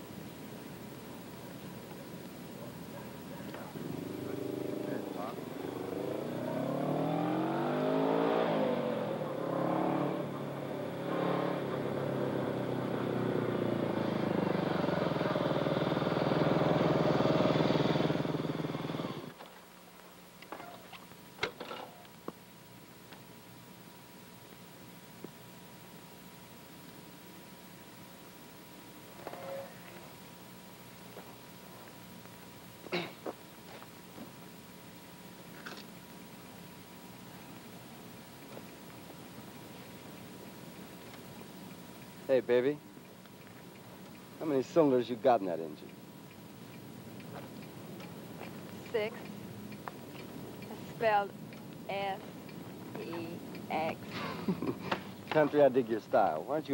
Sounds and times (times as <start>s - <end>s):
Motorcycle: 2.9s - 19.5s, 43.4s - 46.0s.